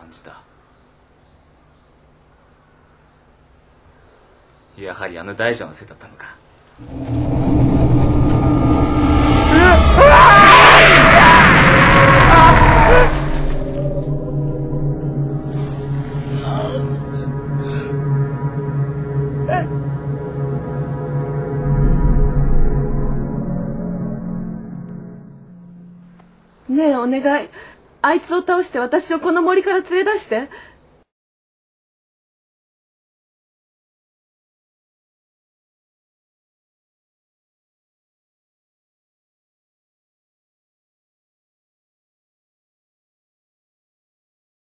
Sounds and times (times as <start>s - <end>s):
Outside, rural or natural: 0.0s - 31.1s
Speech: 4.8s - 6.4s, 26.7s - 30.6s.